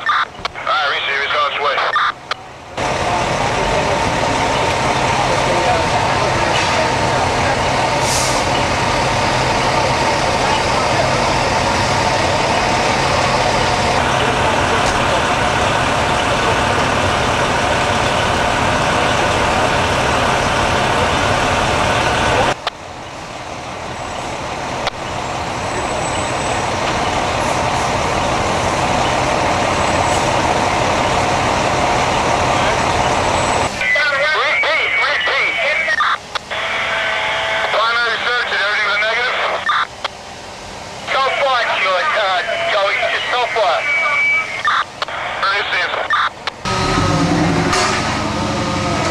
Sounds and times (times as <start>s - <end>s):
Truck: 0.0s - 49.1s.